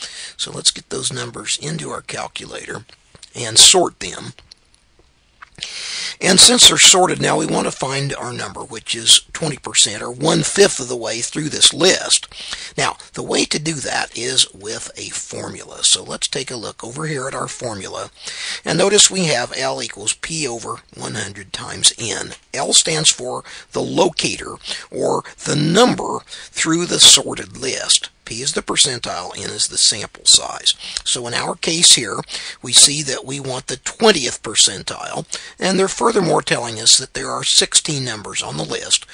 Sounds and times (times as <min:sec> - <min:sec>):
Speech: 0:00.0 - 0:04.5, 0:05.6 - 0:39.1
Inside, small room: 0:00.0 - 0:39.1.